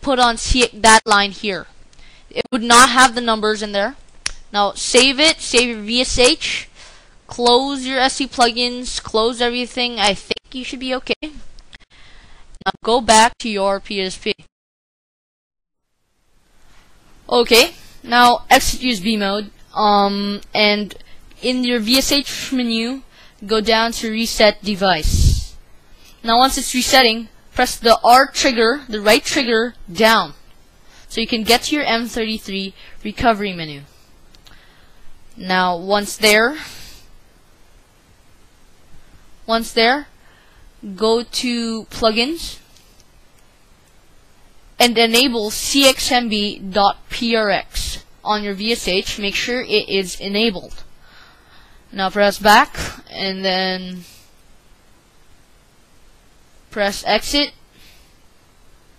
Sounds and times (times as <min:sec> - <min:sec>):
Speech: 0:00.0 - 0:01.7, 0:02.3 - 0:06.7, 0:07.3 - 0:11.5, 0:12.6 - 0:14.5, 0:17.3 - 0:25.6, 0:26.2 - 0:30.4, 0:31.1 - 0:33.9, 0:35.4 - 0:36.8, 0:39.5 - 0:40.1, 0:40.8 - 0:42.7, 0:44.8 - 0:50.8, 0:51.9 - 0:54.2, 0:56.7 - 0:57.6.